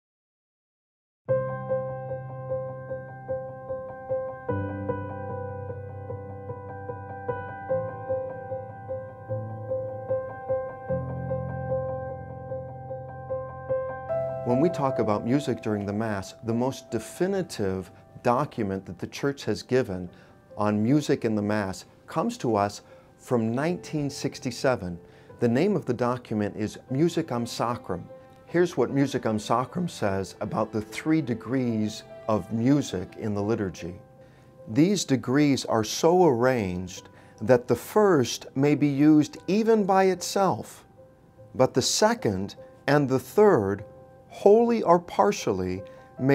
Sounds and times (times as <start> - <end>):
Sad music: 1.3 - 46.3
Speech: 14.5 - 34.0, 34.7 - 40.8, 41.6 - 46.3.